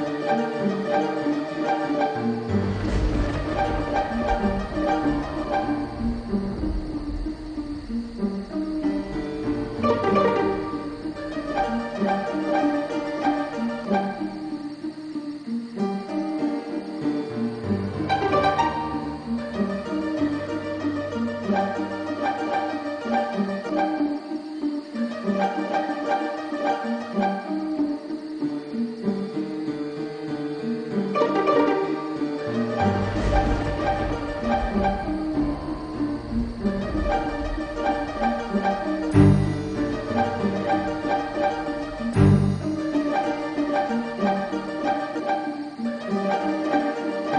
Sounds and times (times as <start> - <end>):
Music: 0.0 - 47.3.